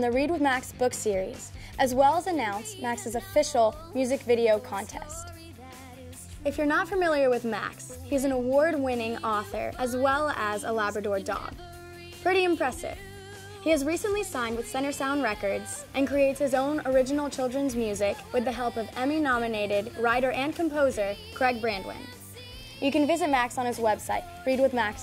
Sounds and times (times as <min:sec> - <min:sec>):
Speech: 0:00.0 - 0:05.3, 0:06.4 - 0:11.6, 0:12.2 - 0:13.0, 0:13.7 - 0:22.1, 0:22.8 - 0:25.0
Music: 0:00.0 - 0:25.0.